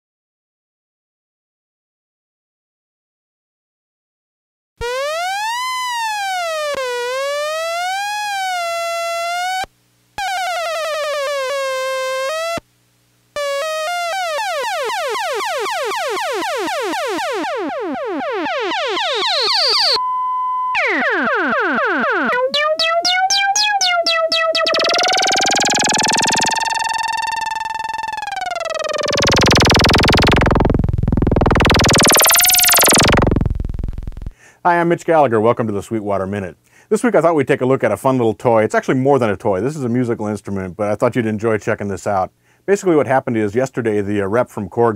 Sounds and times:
Synthesizer: 20.7 - 34.3
Speech: 34.6 - 44.9.

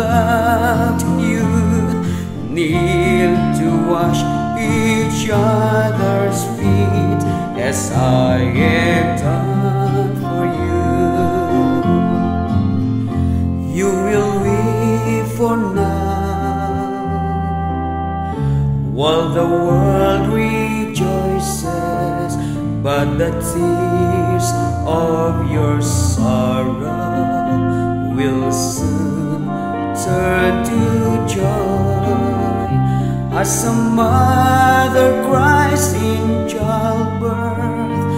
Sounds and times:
Tender music: 0.0 - 38.1.

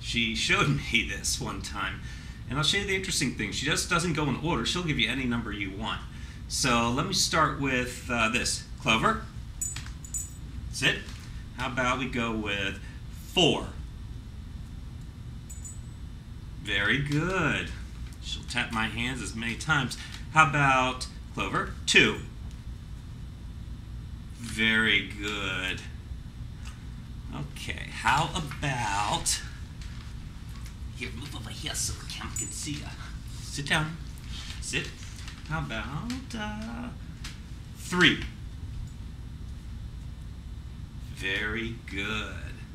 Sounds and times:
Speech: 0.0 - 9.3, 10.8 - 13.8, 16.6 - 22.3, 24.4 - 26.0, 27.3 - 29.6, 31.0 - 34.0, 34.6 - 37.0, 37.8 - 38.3, 41.1 - 42.7.

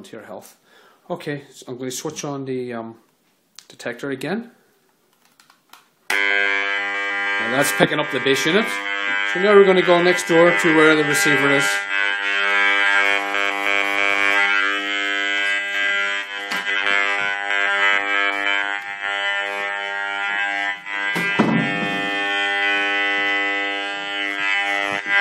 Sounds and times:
Speech: 0.0 - 3.0, 3.6 - 4.6, 7.4 - 11.8.

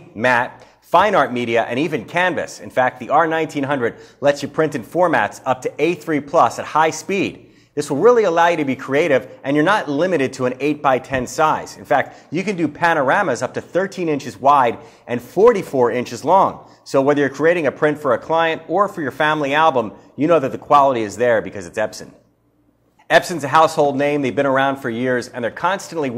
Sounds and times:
Speech: 0.0 - 22.2, 23.1 - 26.1.

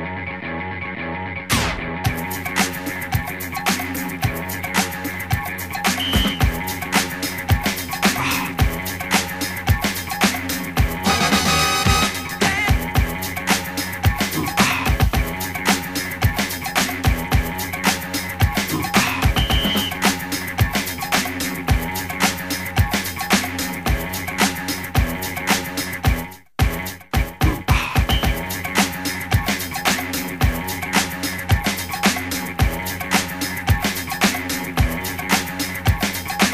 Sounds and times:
Music: 0.0 - 36.5.

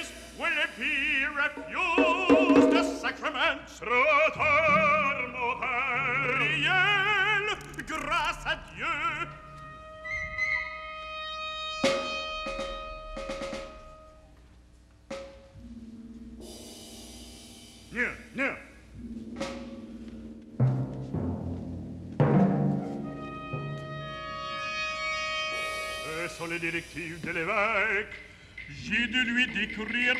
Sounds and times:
Timpani: 0.0 - 3.5, 8.7 - 14.4, 15.1 - 27.5
Speech: 18.0 - 18.7.

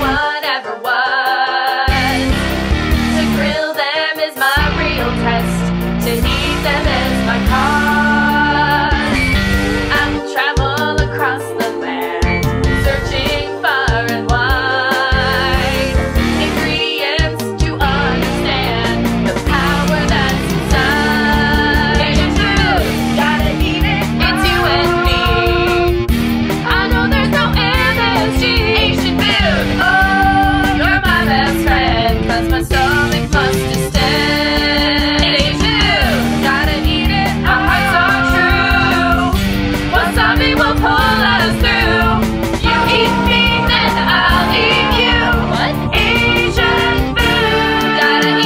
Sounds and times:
Music: 0.0 - 48.4.

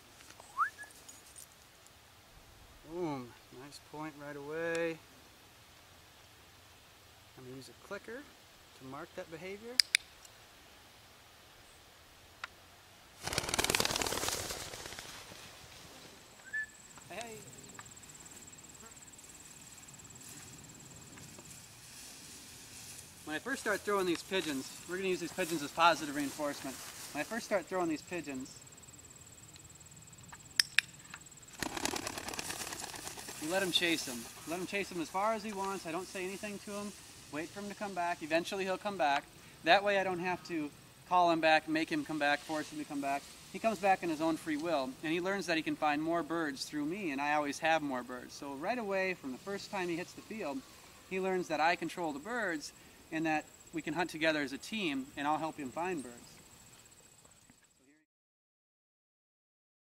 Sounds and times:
Speech: 2.8 - 5.0, 7.4 - 9.8, 17.1 - 17.5, 23.3 - 28.6, 33.4 - 56.4, 57.8 - 58.1.

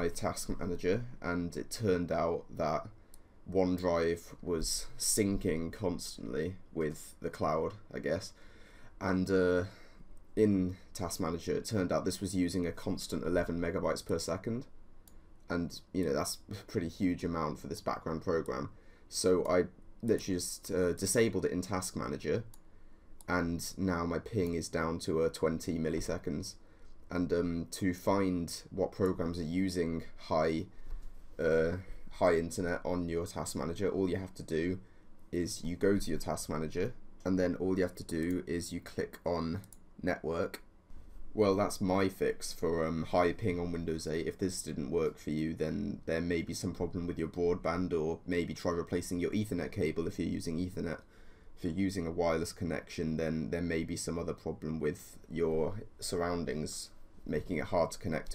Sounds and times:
Speech: 0.0 - 8.4, 9.0 - 14.7, 15.5 - 22.6, 23.3 - 30.8, 31.4 - 40.7, 41.4 - 58.3.

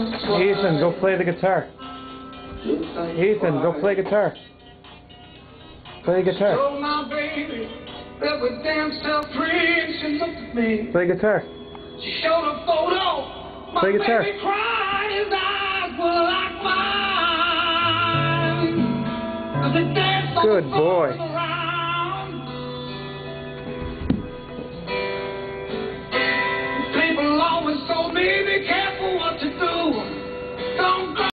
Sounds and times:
Guitar: 0.0 - 31.3.

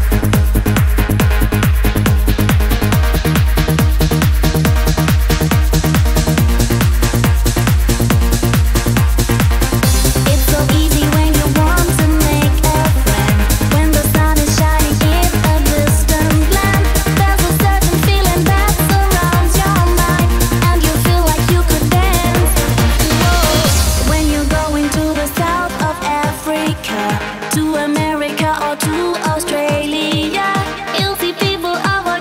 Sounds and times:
Music: 0.0 - 32.2.

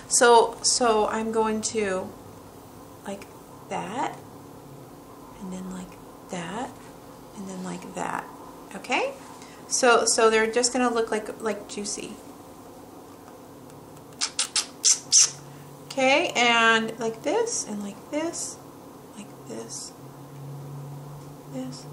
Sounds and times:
Inside, small room: 0.0 - 21.9
Speech: 0.1 - 2.1, 3.1 - 4.2, 5.4 - 6.8, 7.4 - 12.2, 15.9 - 18.6, 19.2 - 20.0, 21.5 - 21.9.

